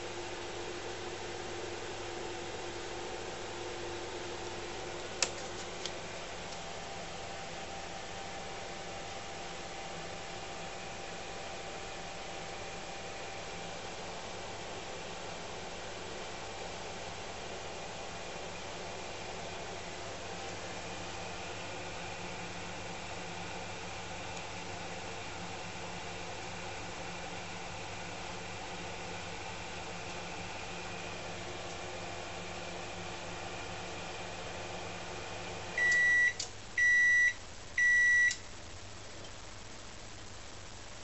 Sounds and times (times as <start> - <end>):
Microwave oven: 0.0 - 41.0.